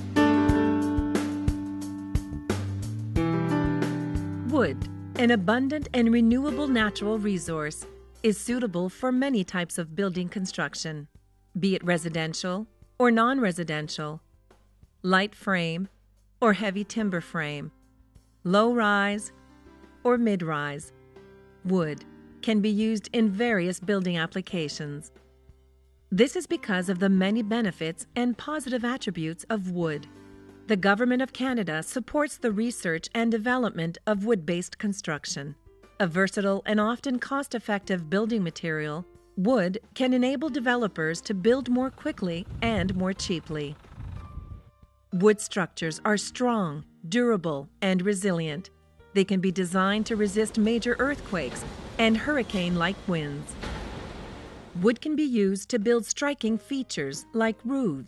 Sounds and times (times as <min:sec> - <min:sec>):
Music: 0:00.0 - 0:53.8, 0:54.8 - 0:58.0
Speech: 0:04.5 - 0:14.2, 0:15.1 - 0:17.7, 0:18.5 - 0:19.3, 0:20.1 - 0:20.9, 0:21.7 - 0:25.1, 0:26.2 - 0:30.1, 0:30.7 - 0:43.8, 0:45.2 - 0:53.6, 0:54.8 - 0:58.0.